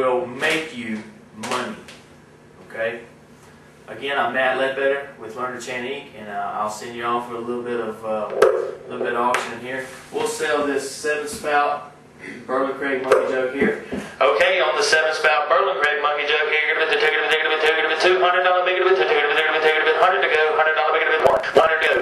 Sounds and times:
Speech: 0:00.0 - 0:01.9, 0:02.6 - 0:03.1, 0:03.9 - 0:22.0.

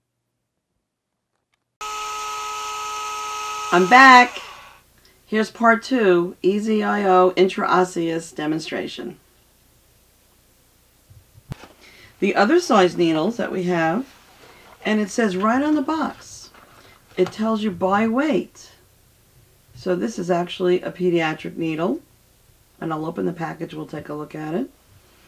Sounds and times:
Dental drill, dentist's drill: 0:01.8 - 0:04.8
Speech: 0:05.3 - 0:09.2, 0:12.2 - 0:14.1, 0:14.8 - 0:16.6, 0:17.2 - 0:18.8, 0:19.8 - 0:22.1, 0:22.8 - 0:24.8.

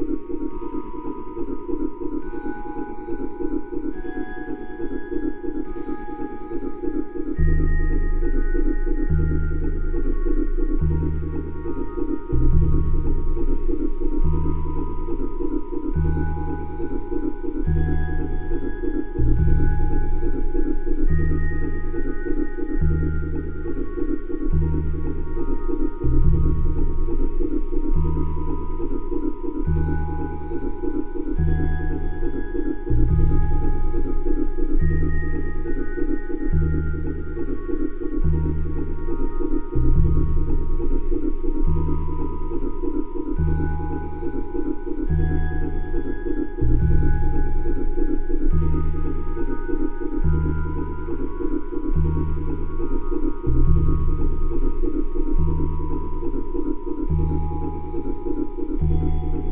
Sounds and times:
Electronica: 0:00.0 - 0:59.5.

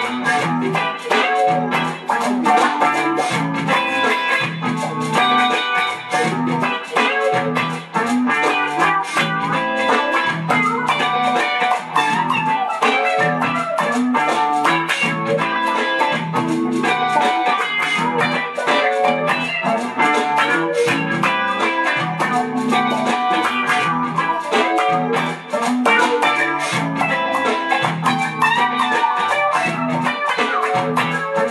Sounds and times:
Electric guitar: 0:00.0 - 0:31.5.

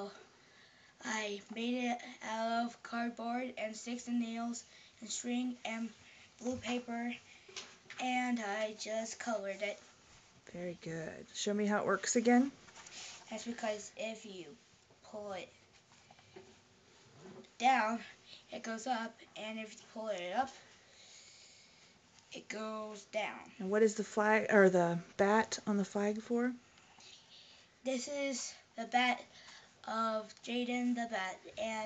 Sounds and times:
Speech: 0:10.5 - 0:12.6, 0:22.4 - 0:26.6.

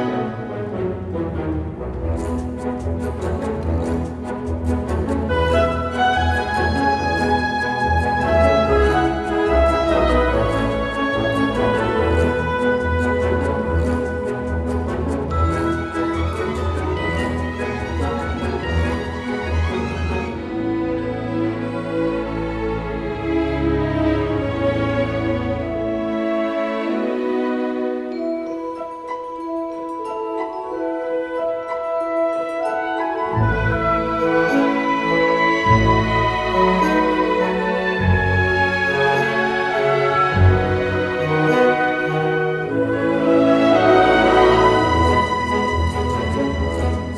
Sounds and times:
Background music: 0:00.0 - 0:47.1
Tender music: 0:00.0 - 0:47.1.

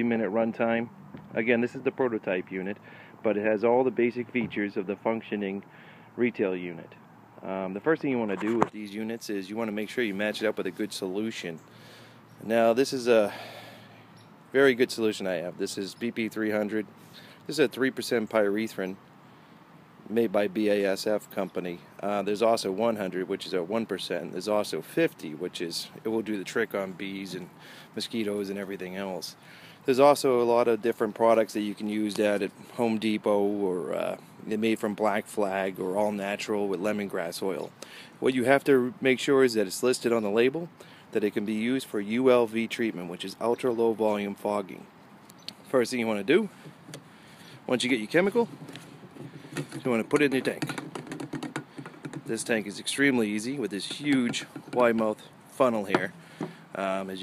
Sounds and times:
Speech: 0:00.0 - 0:11.6, 0:12.4 - 0:13.4, 0:14.6 - 0:16.9, 0:17.5 - 0:19.0, 0:20.1 - 0:44.9, 0:45.7 - 0:46.5, 0:47.7 - 0:48.5, 0:49.8 - 0:50.8, 0:52.3 - 0:56.1, 0:56.8 - 0:57.2.

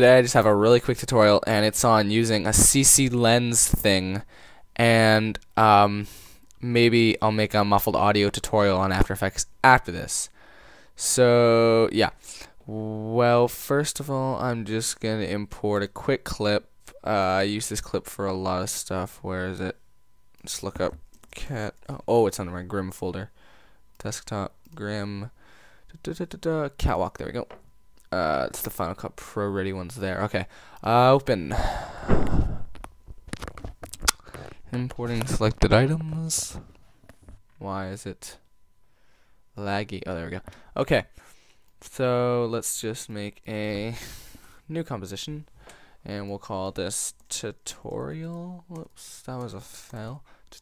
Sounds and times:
Speech: 0:00.0 - 0:04.2, 0:04.8 - 0:10.3, 0:11.0 - 0:19.8, 0:20.4 - 0:23.3, 0:24.0 - 0:25.3, 0:25.9 - 0:27.5, 0:28.1 - 0:31.6, 0:34.7 - 0:36.6, 0:37.6 - 0:38.4, 0:39.6 - 0:41.2, 0:41.8 - 0:44.0, 0:44.7 - 0:50.6.

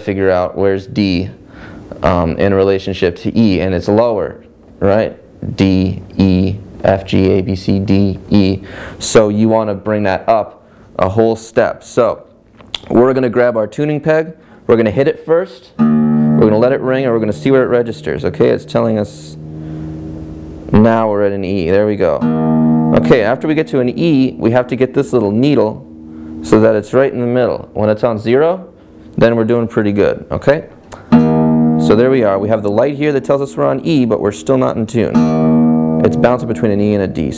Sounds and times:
Speech: 0:00.0 - 0:01.4, 0:02.0 - 0:15.8, 0:16.4 - 0:19.4, 0:20.7 - 0:22.2, 0:22.9 - 0:30.8, 0:31.8 - 0:35.2, 0:36.0 - 0:37.3.

